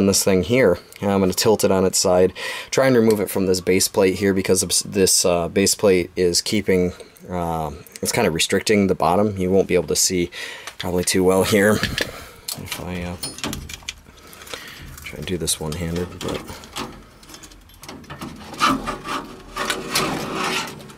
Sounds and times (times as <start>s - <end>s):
Speech: 0.0s - 12.0s, 12.6s - 13.4s, 15.0s - 16.7s.